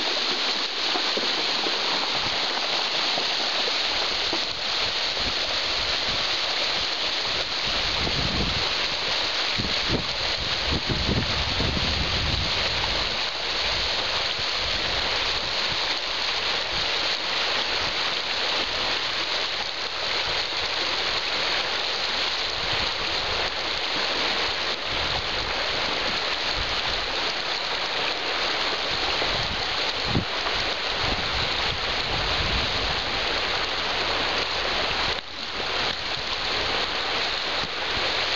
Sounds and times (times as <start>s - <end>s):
Stream: 0.0s - 38.3s.